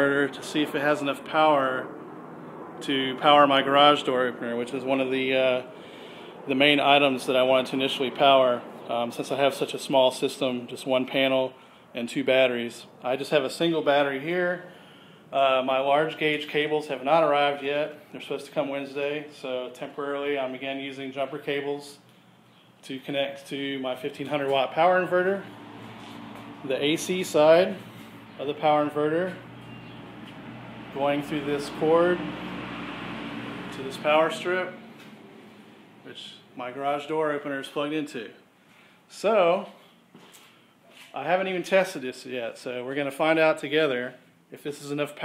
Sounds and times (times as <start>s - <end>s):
Speech: 0.0s - 1.9s, 2.8s - 5.7s, 6.5s - 14.7s, 15.3s - 22.0s, 22.8s - 25.5s, 26.6s - 27.8s, 28.4s - 29.4s, 31.0s - 32.3s, 33.7s - 34.8s, 36.1s - 38.4s, 39.1s - 39.8s, 41.1s - 45.2s.